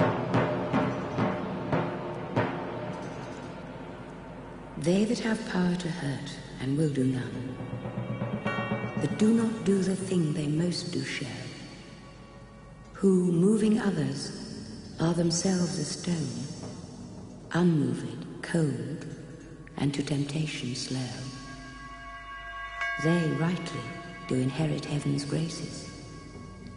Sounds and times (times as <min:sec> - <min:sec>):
Speech: 0:04.8 - 0:07.6, 0:09.0 - 0:11.6, 0:13.0 - 0:16.6, 0:17.5 - 0:19.1, 0:19.8 - 0:21.4, 0:23.0 - 0:25.9.